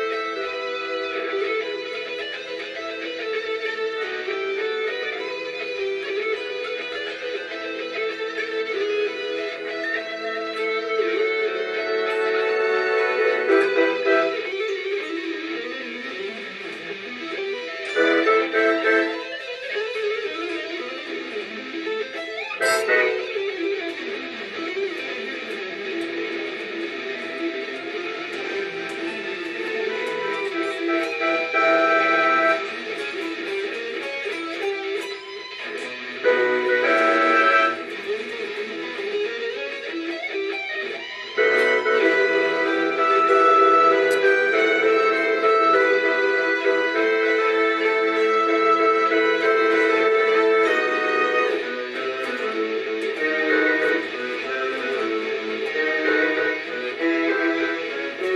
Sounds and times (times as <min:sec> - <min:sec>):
Electric guitar: 0:00.0 - 0:58.3.